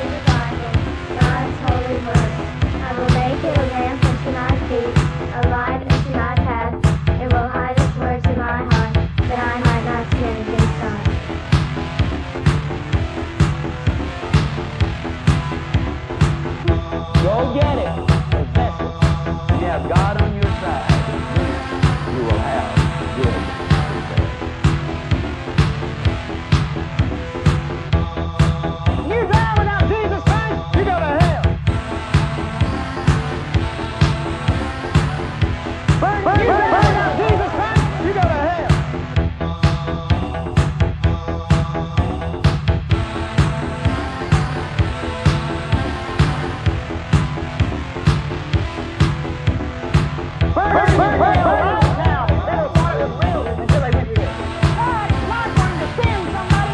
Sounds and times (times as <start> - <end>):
Speech: 0.0 - 11.2, 17.2 - 18.0, 19.6 - 21.1, 22.1 - 24.3, 29.1 - 31.5, 36.0 - 38.8, 50.6 - 56.7
Music: 0.0 - 56.7.